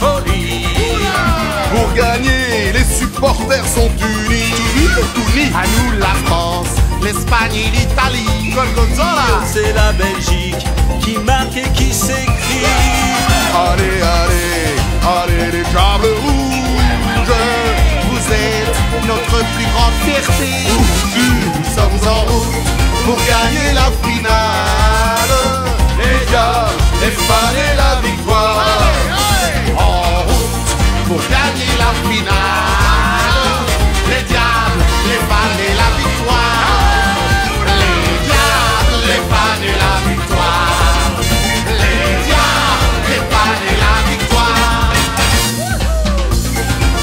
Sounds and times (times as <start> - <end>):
Music: 0.0 - 47.0.